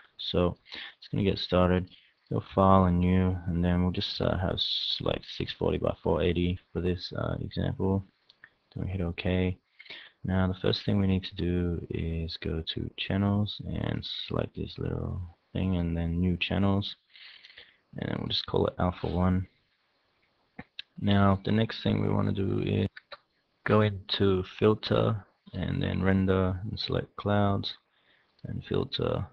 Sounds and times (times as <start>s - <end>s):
Speech: 0.0s - 8.1s, 8.8s - 17.0s, 18.0s - 19.5s, 20.6s - 27.8s, 28.5s - 29.3s.